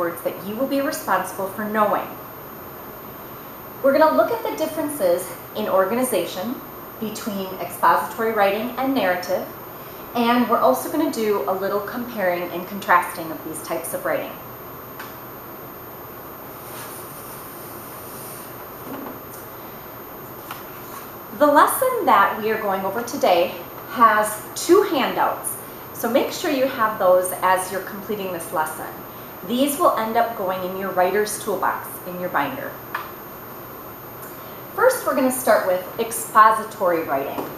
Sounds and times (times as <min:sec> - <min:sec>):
Speech: 0:00.0 - 0:02.2, 0:03.9 - 0:09.5, 0:10.2 - 0:14.4, 0:21.4 - 0:32.8, 0:34.8 - 0:37.5.